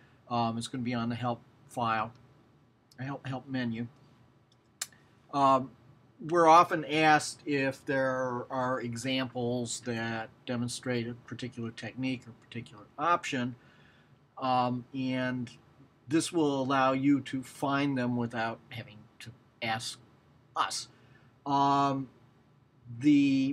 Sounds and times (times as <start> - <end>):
Speech: 0.3 - 2.2, 3.0 - 4.0, 5.3 - 13.6, 14.4 - 20.0, 20.6 - 20.9, 21.5 - 22.2, 22.9 - 23.5.